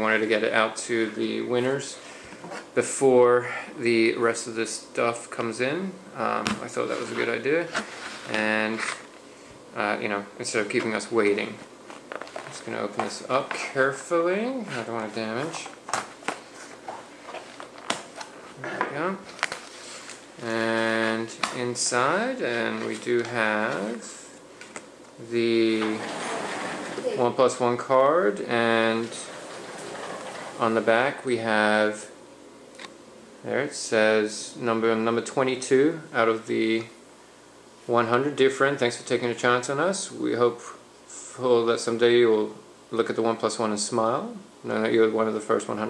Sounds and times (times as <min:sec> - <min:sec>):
Speech: 0:00.0 - 0:02.0, 0:02.8 - 0:09.0, 0:09.8 - 0:11.7, 0:12.4 - 0:15.8, 0:18.6 - 0:19.3, 0:20.4 - 0:24.4, 0:25.2 - 0:29.4, 0:30.6 - 0:32.2, 0:33.4 - 0:37.0, 0:37.9 - 0:45.9
Inside, small room: 0:00.0 - 0:45.9.